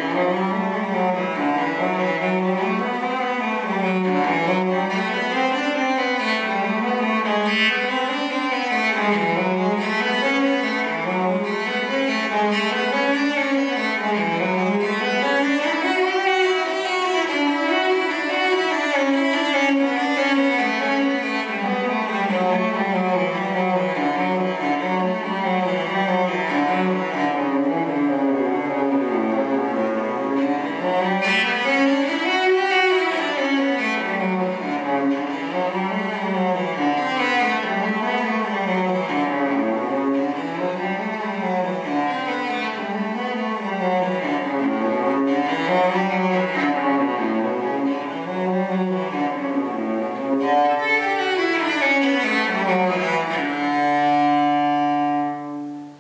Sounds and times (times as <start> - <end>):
Cello: 0.0 - 56.0.